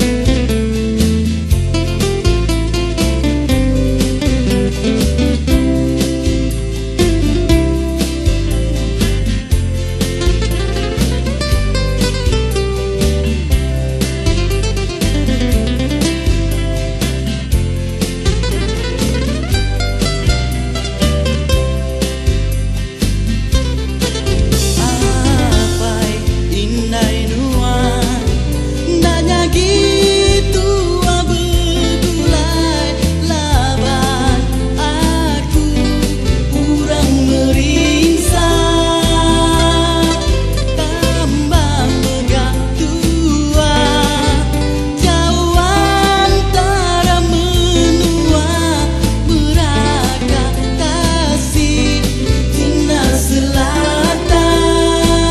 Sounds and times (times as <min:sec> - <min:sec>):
Musical instrument: 0:00.0 - 0:55.3
Singing: 0:24.8 - 0:55.3.